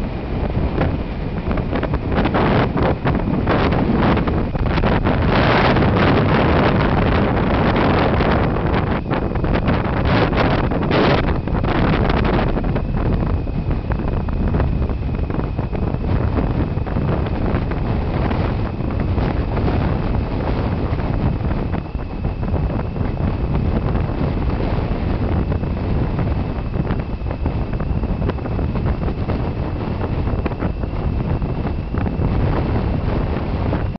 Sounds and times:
Waves, surf: 0.0 - 33.9
Wind noise (microphone): 0.0 - 33.9.

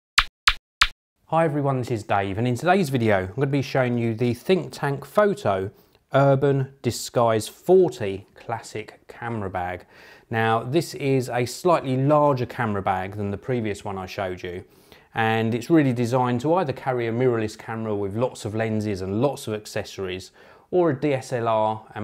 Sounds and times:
Speech: 1.3 - 22.0.

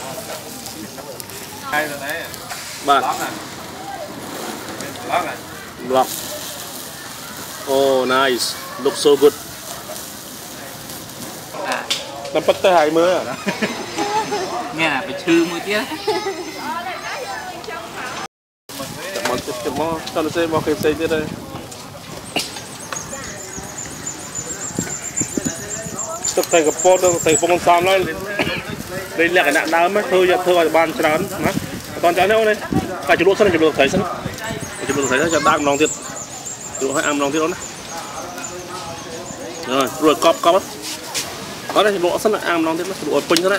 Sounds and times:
Outside, urban or manmade: 0.0 - 43.5.

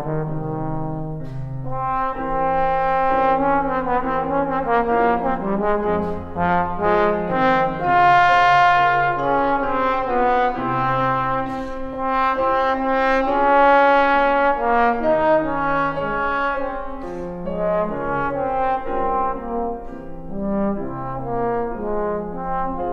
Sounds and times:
French horn: 0.0 - 22.9.

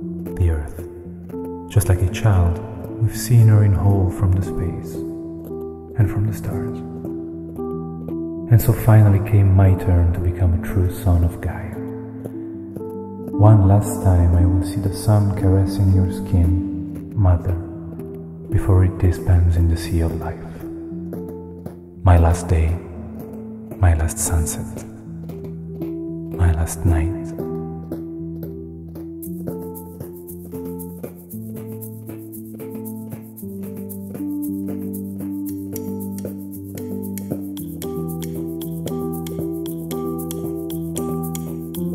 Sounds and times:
Music: 0.0 - 41.9
Speech: 0.4 - 0.8, 1.7 - 5.0, 6.0 - 6.8, 8.5 - 11.8, 13.4 - 17.7, 18.5 - 20.6, 22.0 - 23.0, 23.8 - 24.9, 26.4 - 27.4.

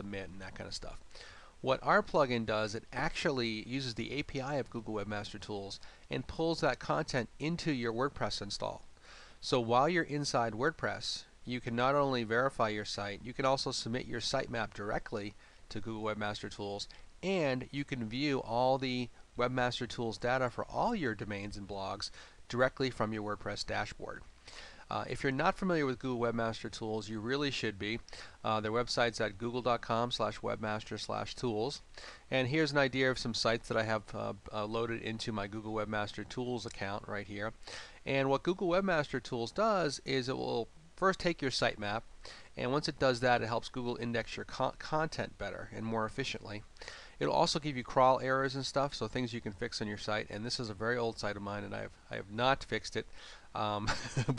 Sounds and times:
Speech: 0.0 - 24.3, 24.9 - 54.3.

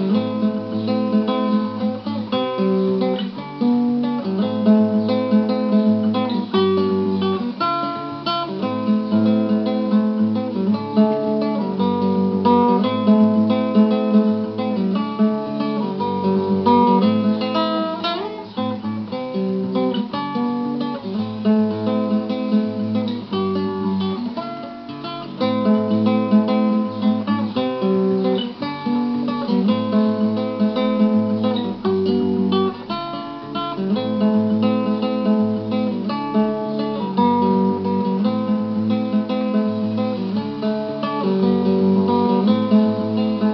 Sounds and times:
Music: 0.0 - 43.5
Rustling leaves: 0.0 - 43.5.

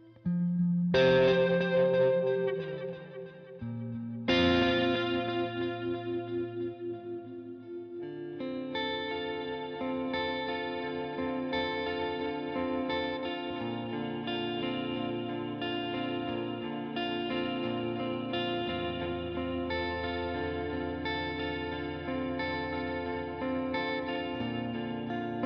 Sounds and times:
Music: 0.0 - 25.4.

